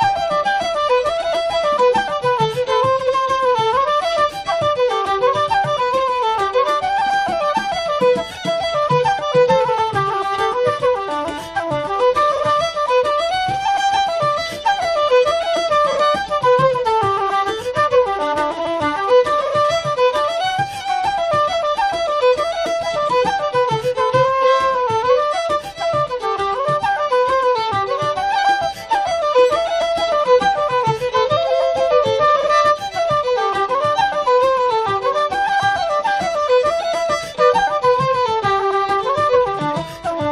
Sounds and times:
Flute: 0.0s - 40.3s
Violin, fiddle: 0.0s - 40.3s.

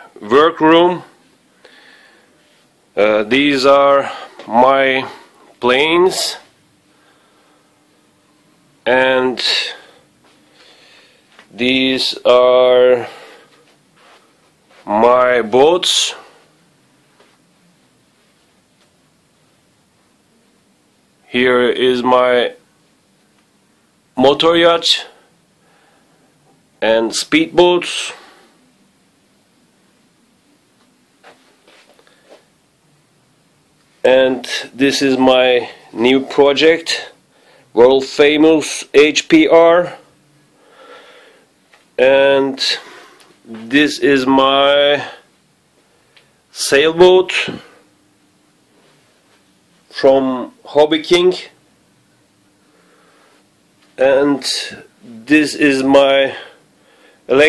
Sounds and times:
Speech: 0.2s - 1.2s, 3.0s - 6.5s, 8.8s - 9.9s, 11.5s - 13.2s, 14.8s - 16.3s, 21.3s - 22.6s, 24.2s - 25.2s, 26.8s - 28.2s, 34.0s - 37.2s, 37.8s - 40.0s, 42.0s - 42.9s, 43.5s - 45.3s, 46.5s - 47.8s, 49.9s - 51.6s, 54.0s - 56.6s, 57.3s - 57.4s.

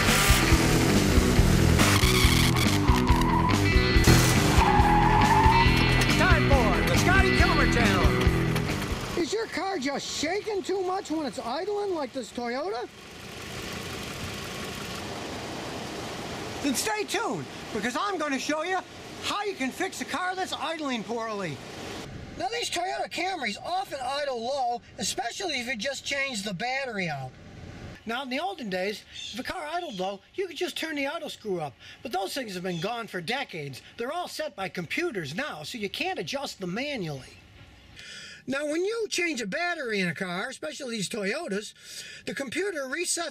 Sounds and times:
Speech: 6.1s - 8.1s, 9.2s - 12.9s, 16.6s - 21.6s, 22.4s - 27.3s, 28.0s - 37.4s, 38.5s - 43.3s.

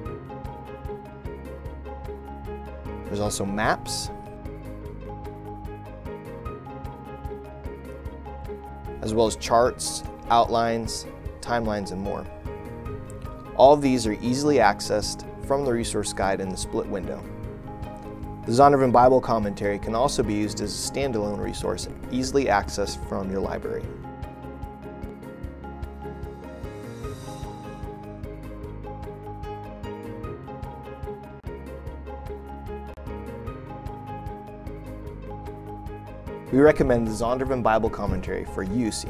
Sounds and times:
Music: 0.0s - 39.0s
Speech: 3.1s - 4.1s, 9.0s - 12.3s, 13.6s - 17.2s, 18.5s - 23.9s, 36.5s - 39.0s.

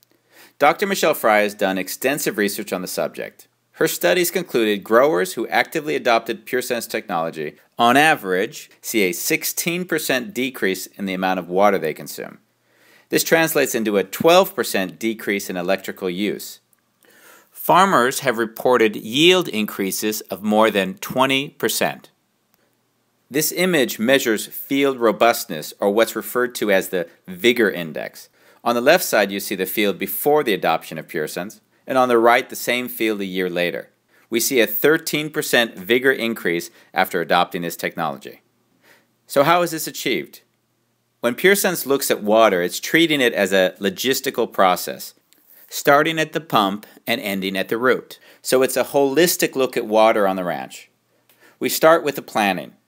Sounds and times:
Speech: 0.6s - 12.4s, 13.1s - 16.7s, 17.6s - 22.2s, 23.3s - 38.4s, 39.3s - 40.5s, 41.2s - 51.0s, 51.6s - 52.8s.

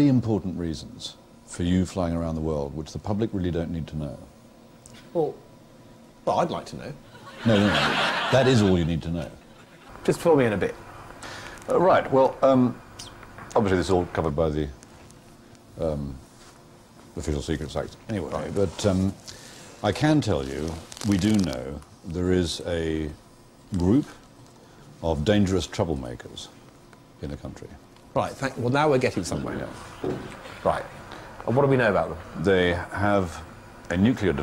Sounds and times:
Speech: 0.0s - 4.3s, 6.3s - 9.4s, 10.0s - 10.8s, 11.7s - 12.8s, 13.6s - 14.8s, 15.8s - 16.2s, 17.1s - 19.2s, 19.8s - 24.2s, 25.0s - 26.6s, 27.2s - 29.8s, 31.5s - 34.4s
Television: 0.0s - 34.4s.

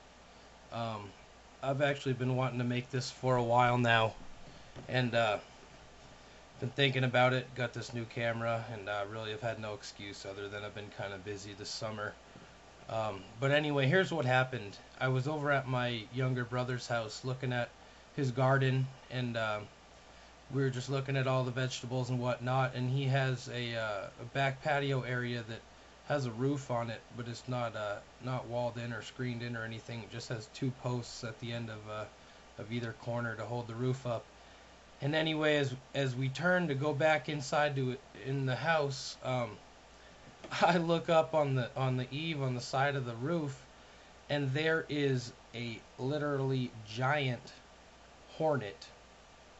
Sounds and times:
Speech: 0.7s - 4.2s, 4.9s - 5.5s, 6.6s - 12.2s, 12.9s - 19.7s, 20.5s - 34.3s, 35.0s - 39.6s, 40.5s - 43.7s, 44.3s - 47.6s, 48.3s - 49.0s.

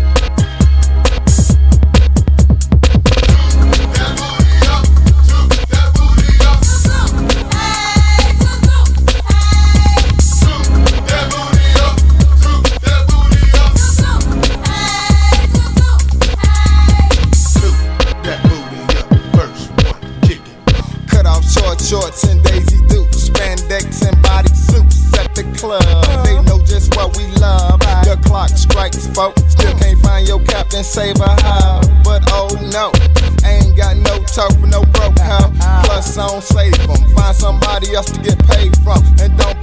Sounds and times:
Music: 0.0s - 39.6s.

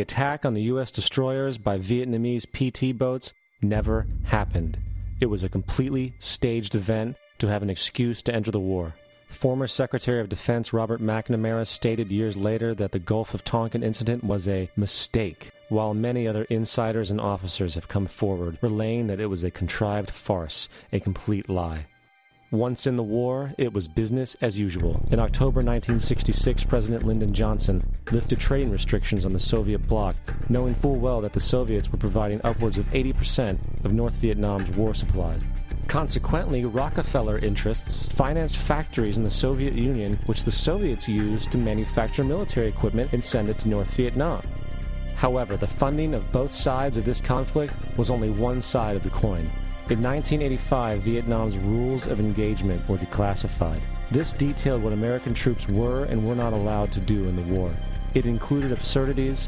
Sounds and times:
Narration, monologue: 0.0s - 59.4s.

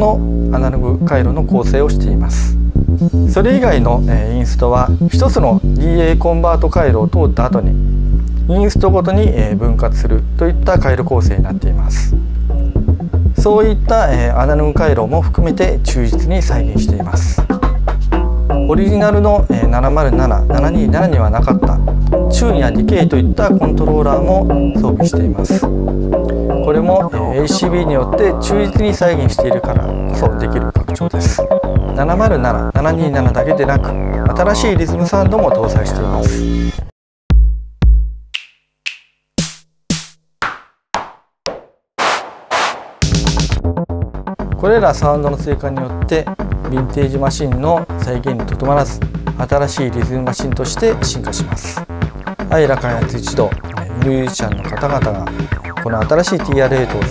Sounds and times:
Speech: 0.0s - 2.6s, 3.3s - 7.8s, 8.4s - 12.2s, 13.4s - 17.5s, 18.6s - 25.7s, 26.6s - 36.6s, 44.6s - 51.9s, 52.5s - 57.1s
Drum machine: 12.5s - 13.6s, 14.8s - 36.5s, 37.3s - 57.1s.

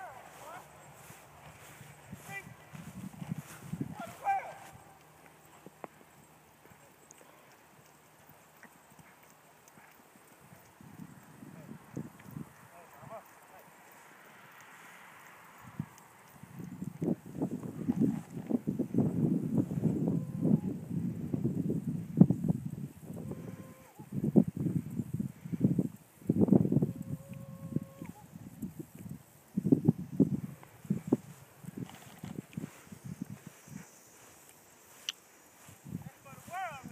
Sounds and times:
Neigh, whinny: 23.2s - 24.0s.

